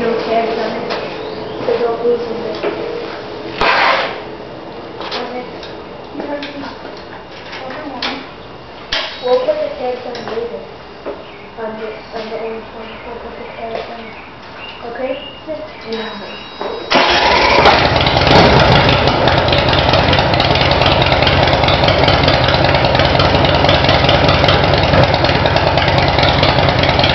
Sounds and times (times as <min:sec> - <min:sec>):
Speech: 0:00.0 - 0:02.8, 0:05.1 - 0:05.6, 0:06.2 - 0:06.8, 0:07.6 - 0:08.3, 0:09.2 - 0:10.7, 0:11.6 - 0:14.2, 0:14.8 - 0:16.8
Motorcycle: 0:16.9 - 0:27.1.